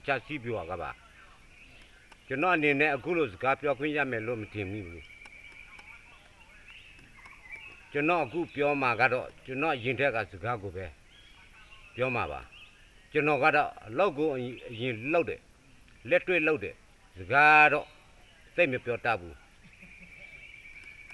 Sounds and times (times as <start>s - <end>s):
Male speech, man speaking: 0.0s - 1.3s, 2.3s - 5.0s, 7.9s - 12.5s, 13.1s - 15.4s, 16.1s - 17.9s, 18.5s - 19.4s
Narration, monologue: 0.0s - 19.7s.